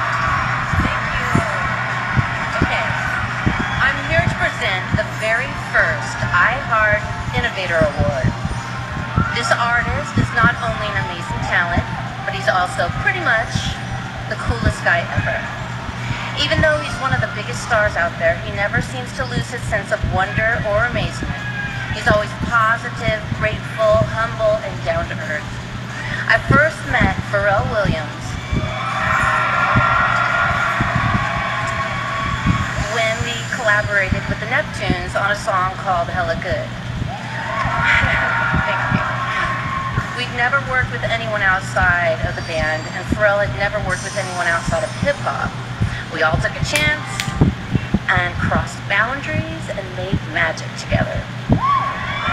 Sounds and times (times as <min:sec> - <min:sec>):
Speech: 0:00.7 - 0:01.7, 0:02.5 - 0:03.2, 0:03.8 - 0:08.4, 0:09.3 - 0:15.5, 0:16.4 - 0:28.4, 0:32.8 - 0:36.7, 0:37.8 - 0:51.3.